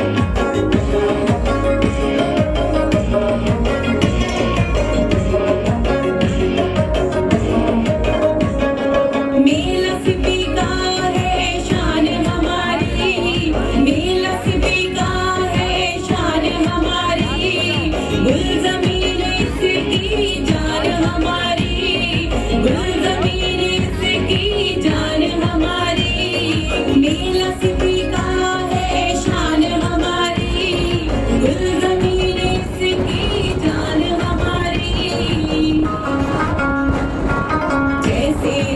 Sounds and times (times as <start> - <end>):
Music: 0.0 - 38.7
Female singing: 9.4 - 36.2, 38.0 - 38.7.